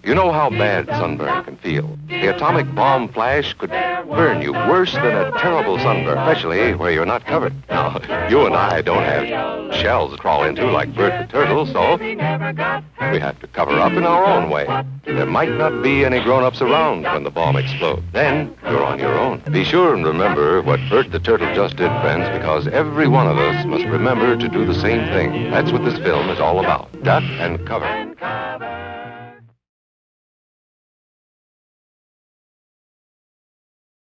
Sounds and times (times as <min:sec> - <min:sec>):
Speech: 0:00.0 - 0:12.0, 0:13.0 - 0:28.0
Music: 0:00.0 - 0:29.6.